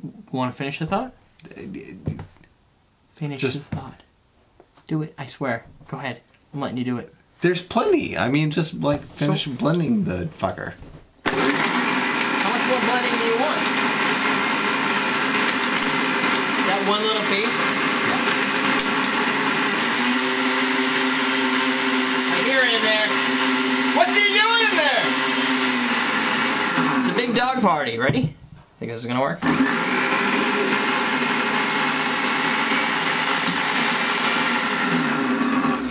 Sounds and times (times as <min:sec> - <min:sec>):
Blender: 0:11.3 - 0:27.6, 0:29.4 - 0:35.9.